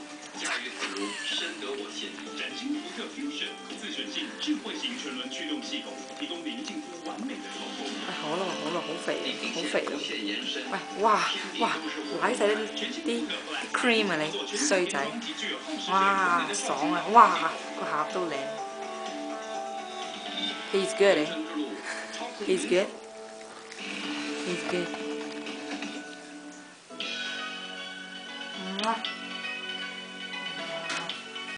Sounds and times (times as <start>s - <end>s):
Music: 0.0s - 31.5s.